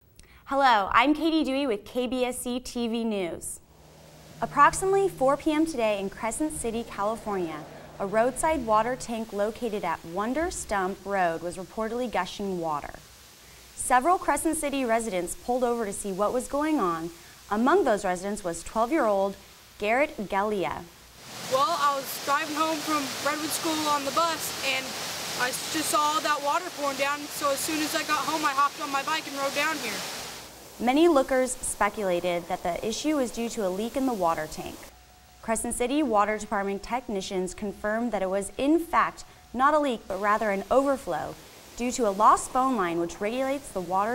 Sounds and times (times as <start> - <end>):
Speech: 0.5 - 3.6, 4.4 - 13.0, 13.8 - 20.9, 21.5 - 30.0, 30.8 - 34.9, 35.5 - 44.1
Waterfall: 3.7 - 35.4, 39.0 - 44.1.